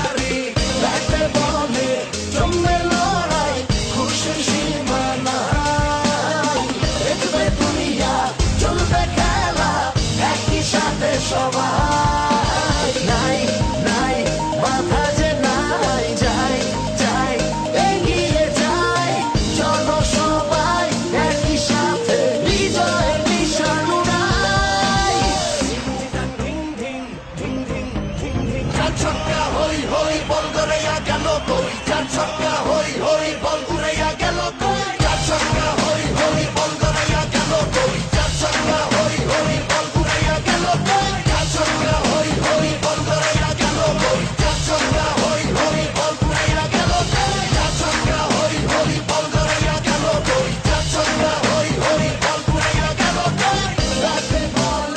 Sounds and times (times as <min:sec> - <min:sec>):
Pop music: 0:00.0 - 0:54.9.